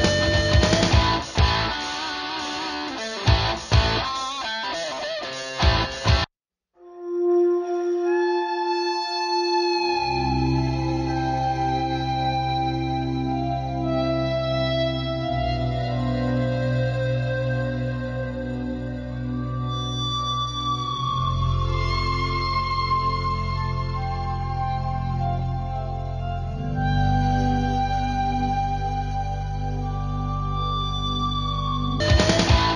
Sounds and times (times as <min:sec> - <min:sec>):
Theremin: 0:00.0 - 0:06.2, 0:06.8 - 0:32.7.